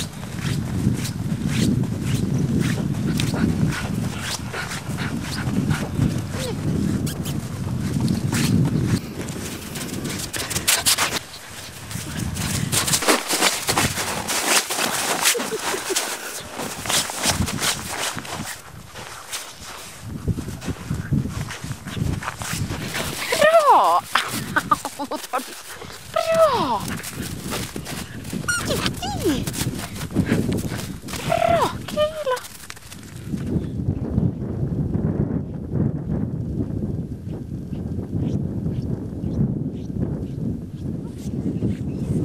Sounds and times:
Speech: 23.3 - 24.1, 26.2 - 26.9, 28.7 - 29.5, 31.2 - 32.5
Whimper (dog): 28.5 - 29.4.

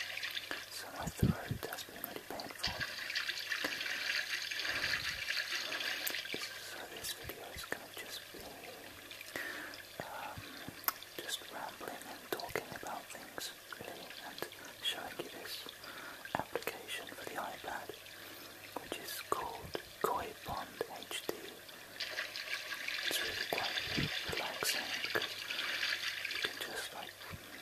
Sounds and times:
Whispering: 0.5 - 2.9, 6.4 - 8.9, 10.0 - 10.6, 11.2 - 18.0, 18.8 - 21.6, 23.1 - 25.3, 26.4 - 27.5.

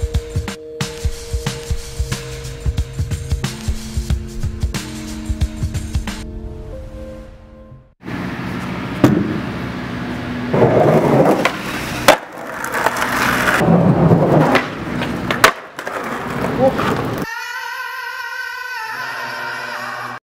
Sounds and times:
Music: 0.0 - 8.0, 17.3 - 20.2
Skateboard: 10.5 - 17.3.

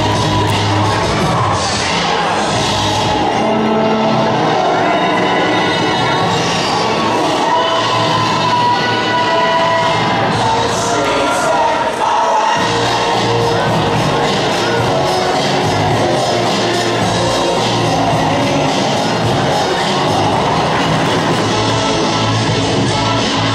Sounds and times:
Dance music: 0.0 - 23.5
Rhythm and blues: 0.0 - 23.5.

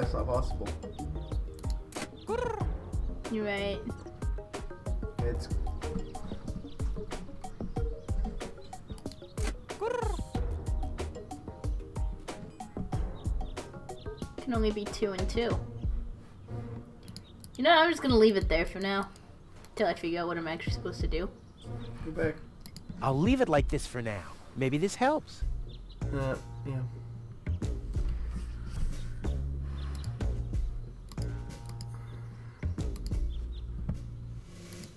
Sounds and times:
Bird: 0.0 - 4.0, 5.2 - 10.6, 11.2 - 16.0, 25.0 - 34.9
Music: 0.0 - 19.2, 19.8 - 34.9.

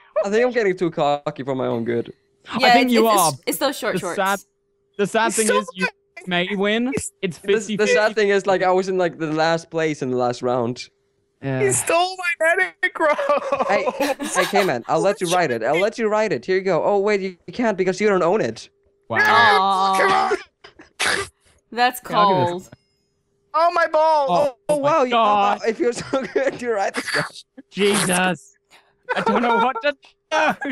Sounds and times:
Speech: 0.2 - 4.4, 5.0 - 20.4, 21.0 - 22.7, 23.6 - 28.5, 29.1 - 30.7.

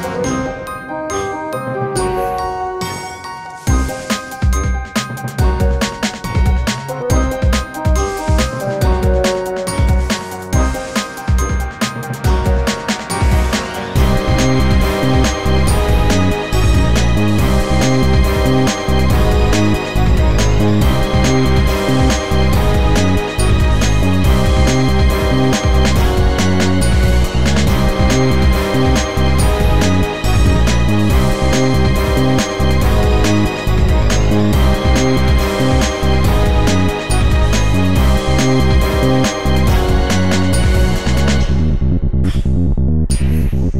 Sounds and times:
Music: 0.0 - 43.8.

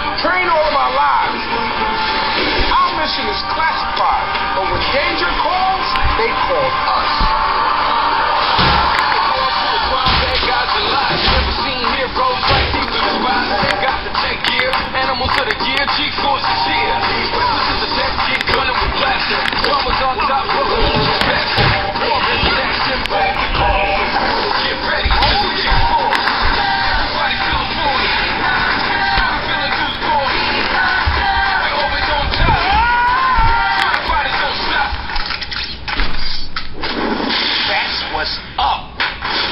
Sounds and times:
Music: 0.0 - 39.5
Speech: 2.7 - 7.1, 37.7 - 38.9.

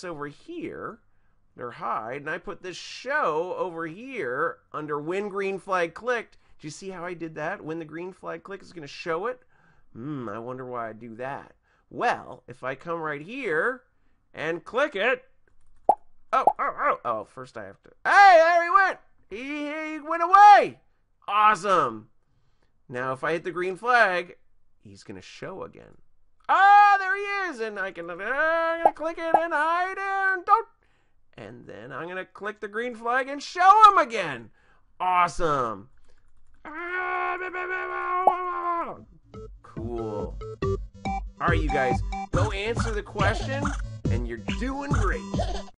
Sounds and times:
Speech: 0.0 - 1.0, 1.6 - 9.4, 10.0 - 15.3, 16.4 - 22.1, 22.9 - 30.7, 31.4 - 35.9, 36.7 - 39.1, 39.8 - 40.4, 41.4 - 45.3
Music: 39.2 - 45.7.

